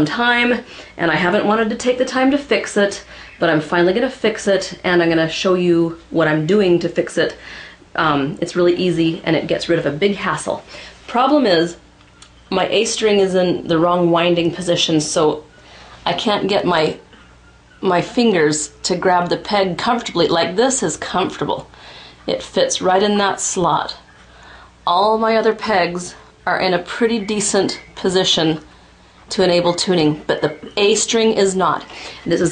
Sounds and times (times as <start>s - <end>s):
Speech: 0.0s - 7.4s, 8.0s - 11.8s, 12.5s - 17.0s, 17.8s - 21.7s, 22.3s - 24.1s, 24.9s - 28.7s, 29.3s - 32.5s.